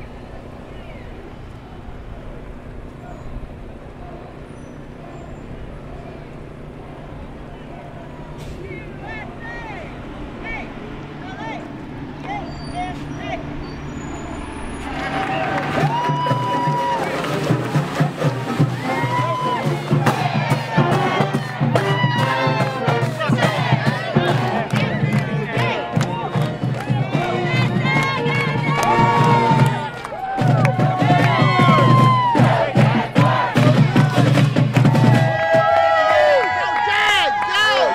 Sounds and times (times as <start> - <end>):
Hubbub, speech noise, speech babble: 0.0 - 37.9
Screaming: 15.0 - 17.1
Music: 15.8 - 35.7.